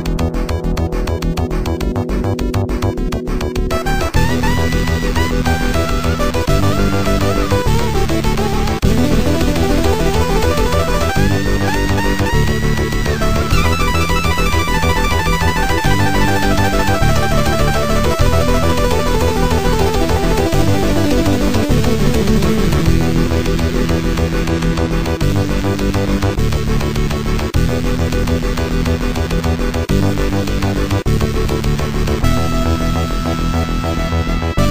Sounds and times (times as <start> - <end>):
Music: 0.0 - 34.7
Cacophony: 3.7 - 31.0.